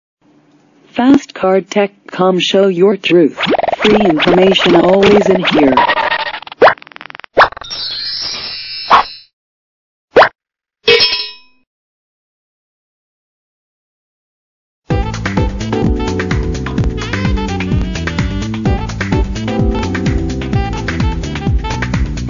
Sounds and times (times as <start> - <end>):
Speech: 0.9 - 5.8.